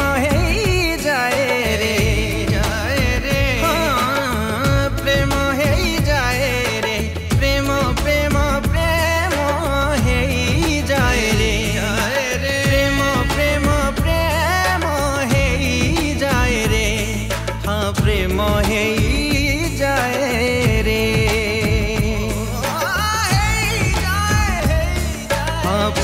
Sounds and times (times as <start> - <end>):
Music of Bollywood: 0.0 - 26.0
Singing: 0.0 - 26.0.